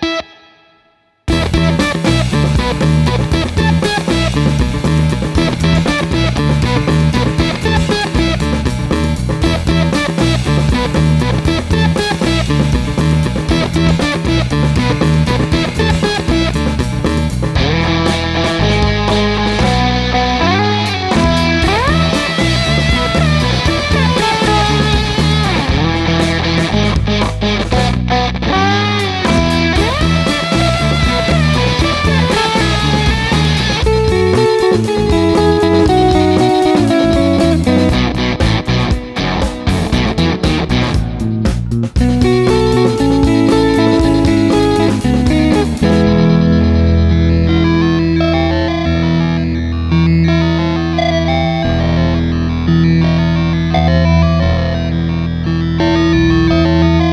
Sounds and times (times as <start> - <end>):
Bass guitar: 0.0 - 0.6, 1.3 - 57.1.